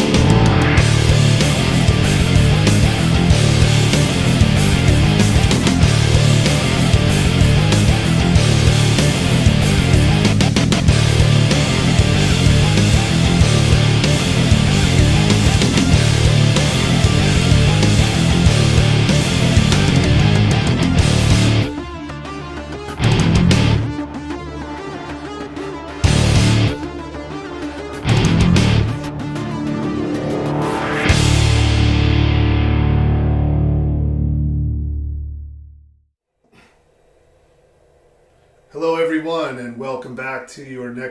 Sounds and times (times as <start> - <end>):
Music: 0.0 - 39.7.